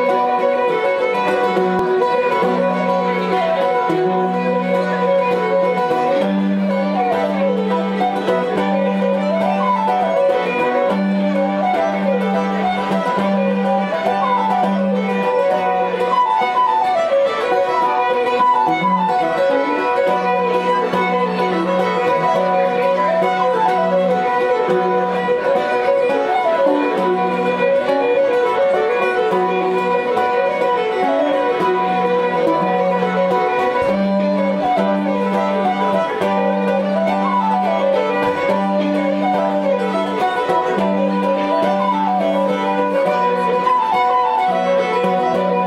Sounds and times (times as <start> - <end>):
Violin, fiddle: 0.0 - 45.6.